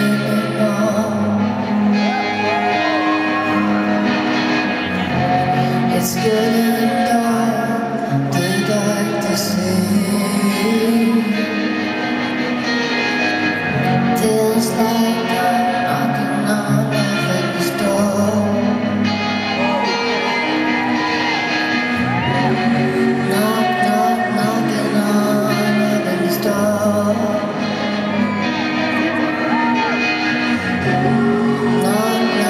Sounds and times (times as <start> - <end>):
Music: 0.0 - 32.4.